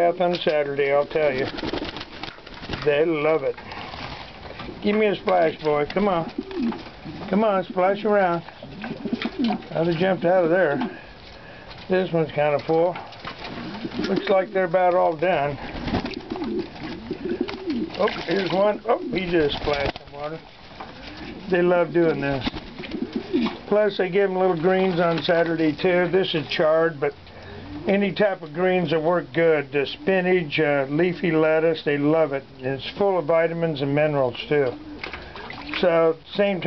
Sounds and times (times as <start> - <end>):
Speech: 0.0 - 1.5, 2.8 - 3.6, 4.8 - 6.4, 7.3 - 8.5, 9.7 - 11.0, 11.9 - 13.0, 14.0 - 15.6, 18.0 - 20.4, 21.5 - 22.5, 23.7 - 27.2, 27.9 - 34.8, 35.8 - 36.6.